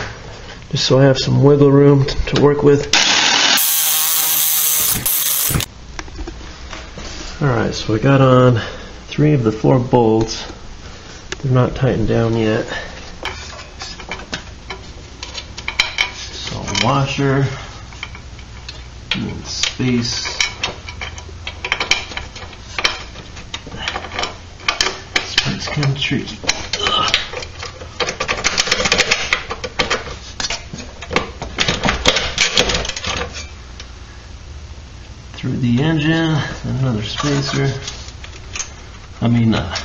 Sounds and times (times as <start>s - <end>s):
Speech: 0.7s - 2.9s, 7.4s - 10.6s, 11.4s - 12.9s, 16.4s - 17.6s, 19.1s - 20.4s, 25.4s - 27.2s, 35.4s - 38.0s, 39.2s - 39.8s.